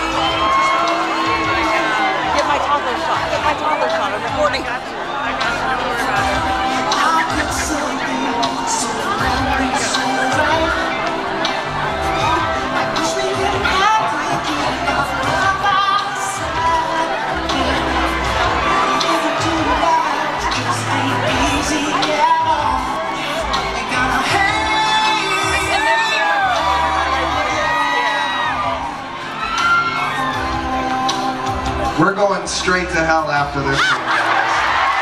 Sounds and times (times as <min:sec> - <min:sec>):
Crowd: 0:00.0 - 0:35.0
Music: 0:00.0 - 0:35.0.